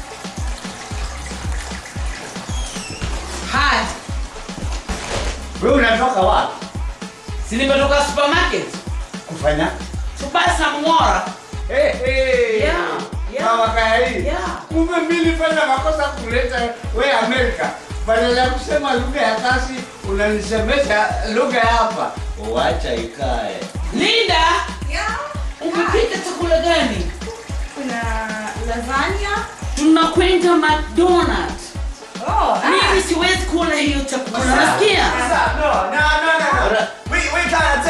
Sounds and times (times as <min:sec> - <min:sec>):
Background music: 0:00.0 - 0:37.8.